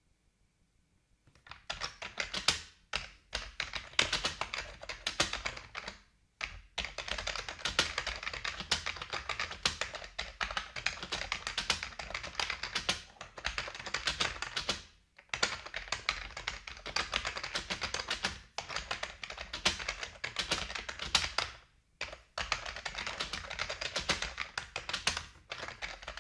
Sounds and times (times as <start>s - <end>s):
Computer keyboard: 1.3s - 26.2s.